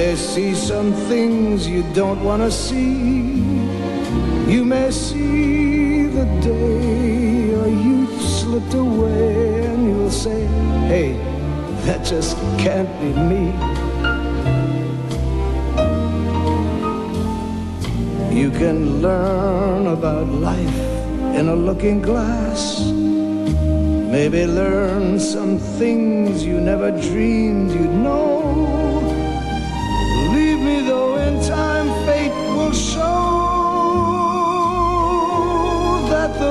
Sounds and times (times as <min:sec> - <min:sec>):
Music: 0:00.0 - 0:36.5.